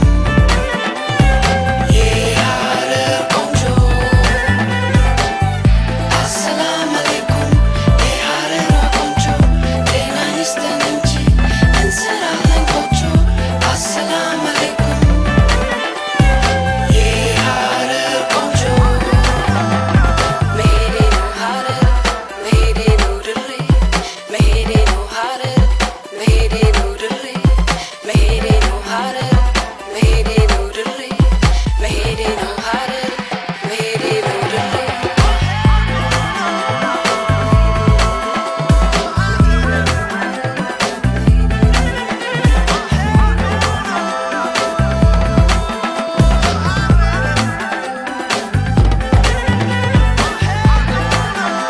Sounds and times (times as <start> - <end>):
Dance music: 0.0 - 51.7.